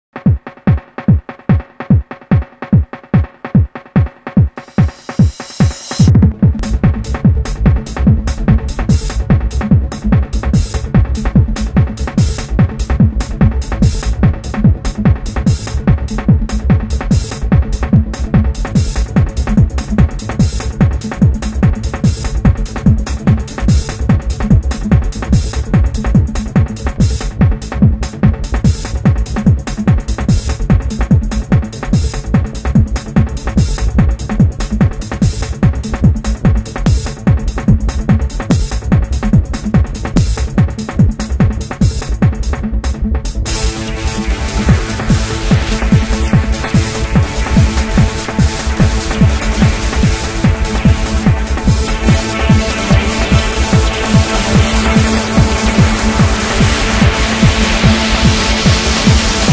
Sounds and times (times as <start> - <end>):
Trance music: 0.8 - 59.5.